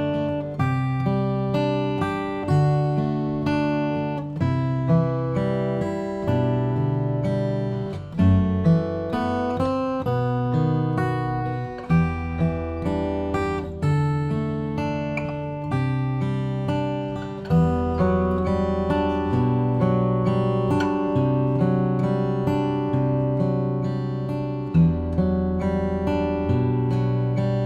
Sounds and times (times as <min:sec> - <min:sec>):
Acoustic guitar: 0:00.0 - 0:27.6.